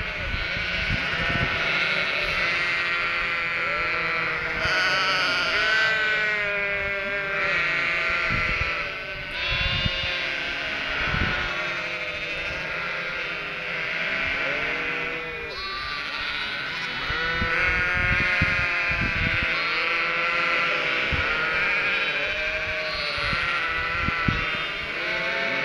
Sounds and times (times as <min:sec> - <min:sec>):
Bleat: 0:00.0 - 0:25.6.